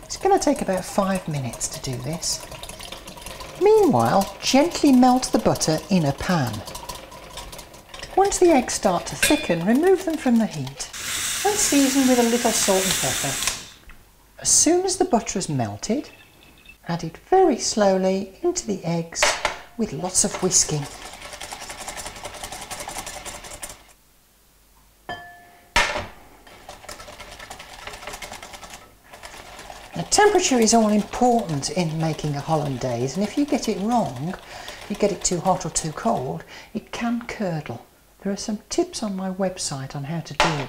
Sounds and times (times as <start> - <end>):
Stir: 0.0 - 12.3, 20.1 - 23.8, 26.5 - 36.5
Sizzle: 10.9 - 13.8.